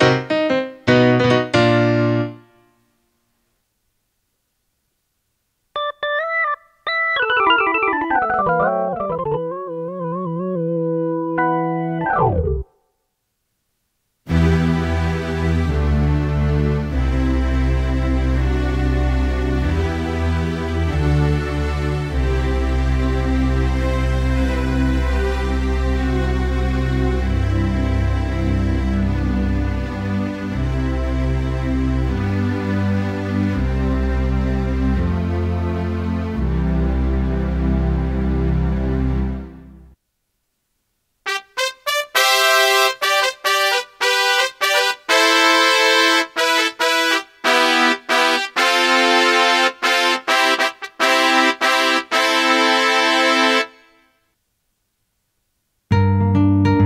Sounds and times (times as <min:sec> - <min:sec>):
Music: 0:00.0 - 0:02.9, 0:05.8 - 0:12.7, 0:14.3 - 0:40.0, 0:41.3 - 0:54.1, 0:55.9 - 0:56.8.